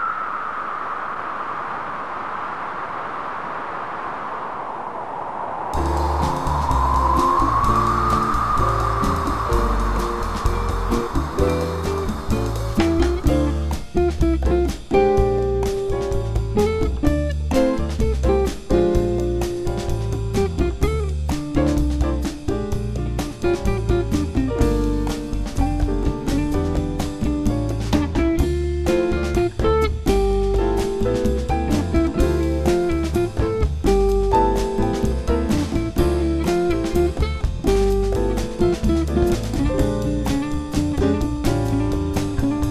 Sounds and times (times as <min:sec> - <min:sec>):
Music: 0:05.8 - 0:42.7.